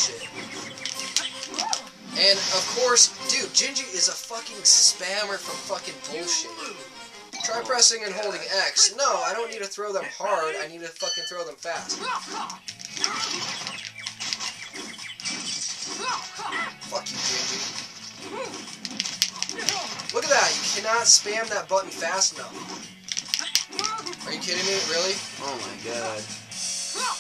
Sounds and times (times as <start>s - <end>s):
Music: 0.0s - 27.2s
Speech: 2.2s - 6.8s, 7.4s - 12.5s, 16.0s - 17.7s, 19.6s - 22.6s, 23.8s - 26.3s.